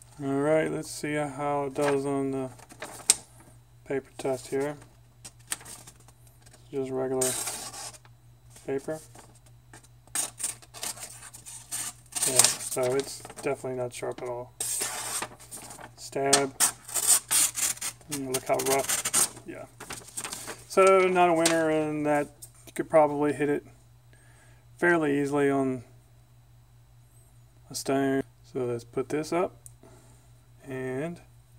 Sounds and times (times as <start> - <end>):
Speech: 0.2 - 2.5, 3.8 - 4.8, 6.7 - 7.4, 8.6 - 9.1, 12.3 - 14.5, 16.0 - 16.6, 18.1 - 18.9, 20.7 - 23.7, 24.8 - 25.9, 27.7 - 29.6, 30.6 - 31.3.